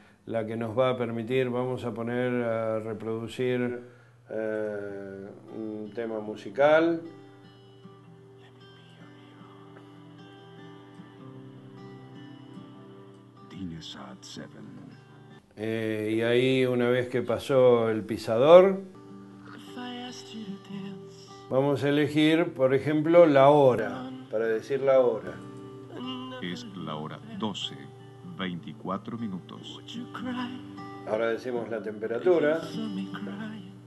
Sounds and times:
Music: 0.0 - 33.8
Speech: 0.3 - 7.1, 13.5 - 15.0, 15.6 - 18.8, 21.5 - 25.4, 26.0 - 29.9, 31.1 - 33.5.

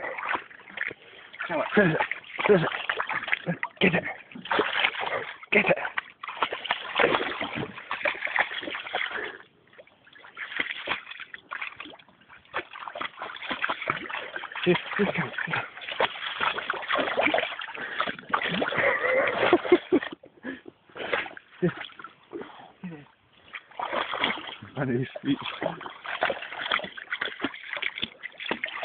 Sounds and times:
Speech: 1.4 - 2.8, 5.5 - 6.0, 14.6 - 15.7, 22.8 - 23.1, 24.7 - 25.8.

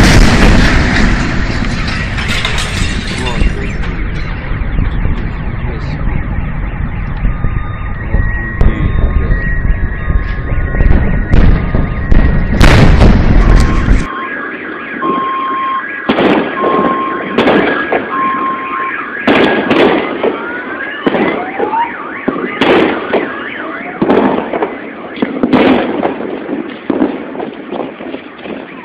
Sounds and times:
Explosion: 0.0 - 28.8.

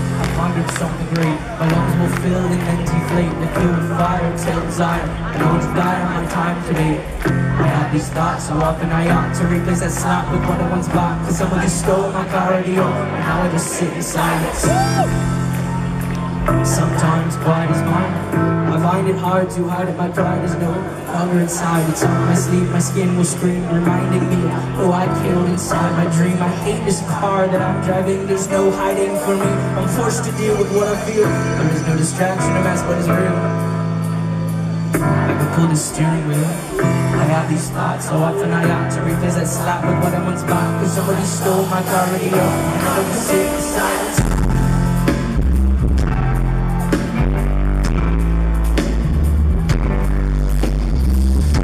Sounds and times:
Music: 0.0 - 51.6.

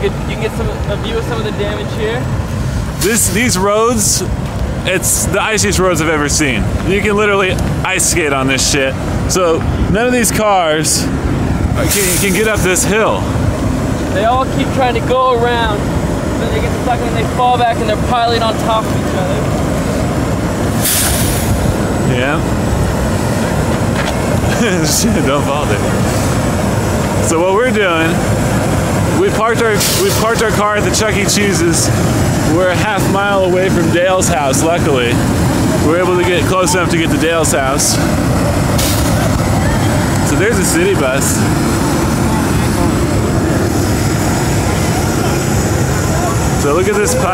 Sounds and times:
Speech: 0.0 - 2.3, 3.0 - 11.1, 11.8 - 13.3, 14.1 - 19.5, 22.0 - 22.5, 24.5 - 25.9, 27.2 - 28.2, 29.1 - 38.1, 39.1 - 41.5, 46.0 - 47.3.

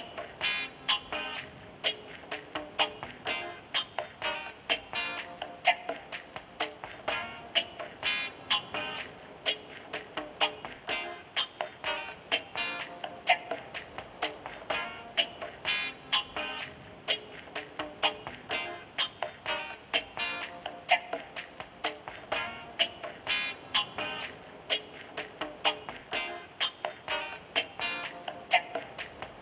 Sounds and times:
Music: 0.0 - 29.4.

